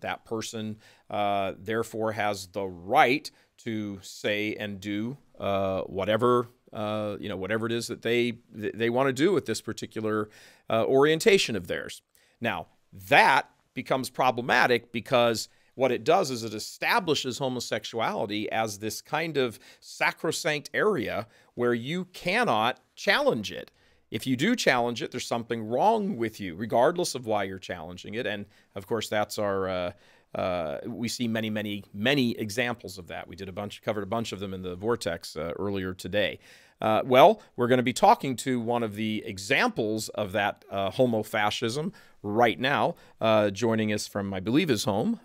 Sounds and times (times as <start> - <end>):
Male speech, man speaking: 0.0 - 45.2
Narration, monologue: 0.0 - 45.2.